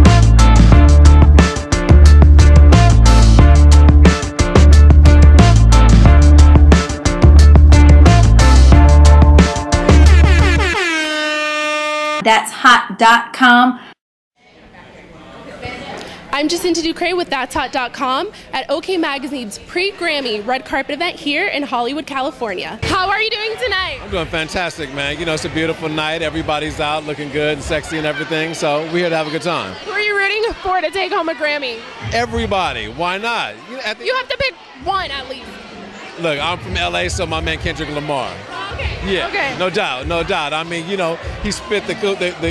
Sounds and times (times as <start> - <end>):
Music: 0.0 - 12.2.